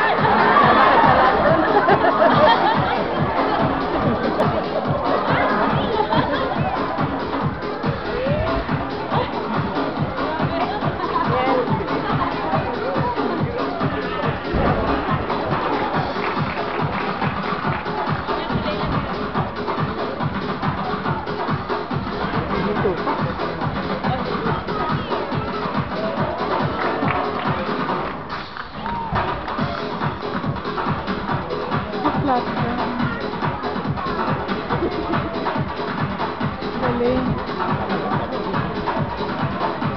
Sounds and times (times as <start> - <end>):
Crowd: 0.0 - 39.9
Music: 0.0 - 39.9
Speech: 7.9 - 15.3, 18.0 - 19.3, 22.1 - 26.6, 31.8 - 35.7, 36.6 - 39.9.